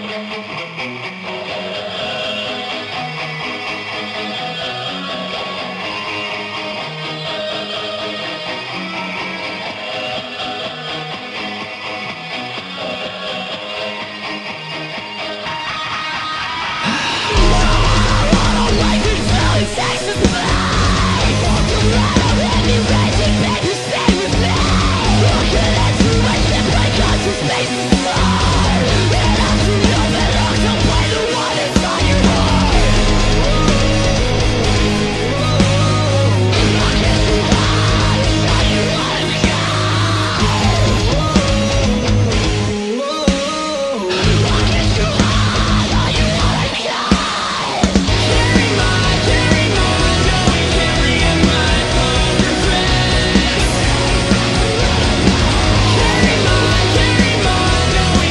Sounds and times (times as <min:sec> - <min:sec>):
Music: 0:00.0 - 0:58.3.